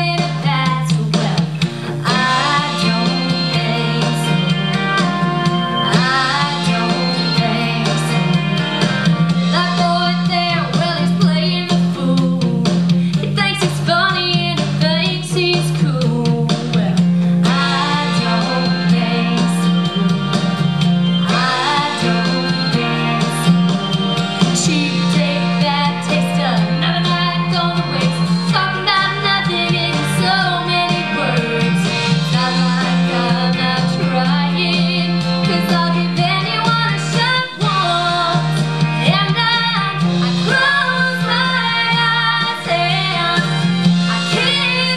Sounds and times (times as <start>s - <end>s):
Music: 0.0s - 44.9s.